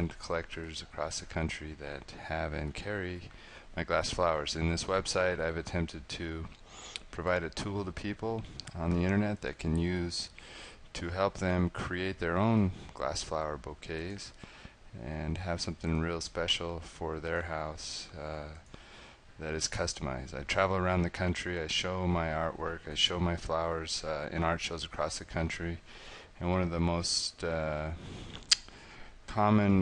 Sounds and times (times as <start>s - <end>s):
Speech: 0.0s - 10.3s, 11.0s - 18.6s, 19.4s - 25.8s, 26.4s - 28.0s, 29.3s - 29.8s.